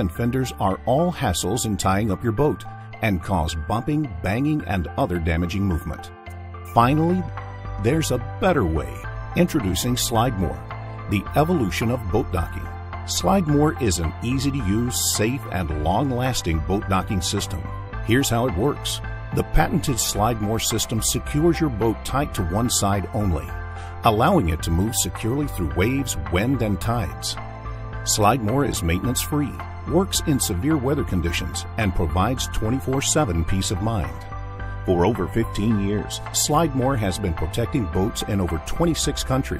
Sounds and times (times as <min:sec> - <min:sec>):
Speech: 0:00.0 - 0:06.1, 0:06.7 - 0:27.4, 0:28.1 - 0:34.2, 0:34.9 - 0:39.5
Music: 0:00.0 - 0:39.5.